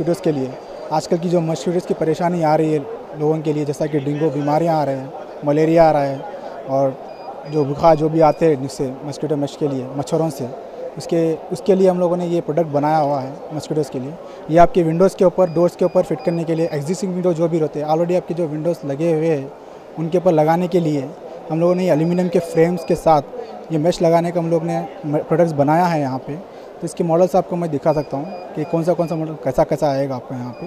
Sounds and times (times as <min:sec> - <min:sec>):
Speech: 0:00.0 - 0:30.6.